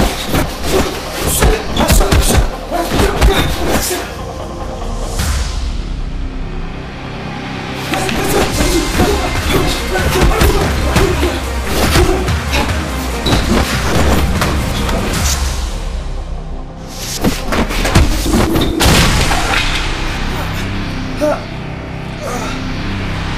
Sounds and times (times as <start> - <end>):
Music: 0.0 - 23.3.